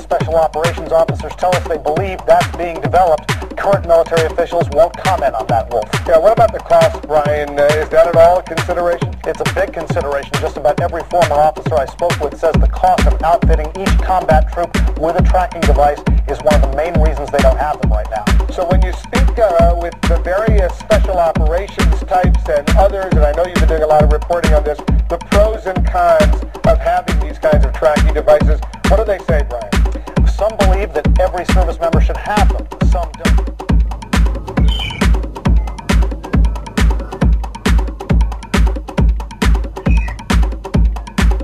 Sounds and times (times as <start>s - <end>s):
Speech: 0.0s - 33.4s
Music: 0.0s - 41.4s.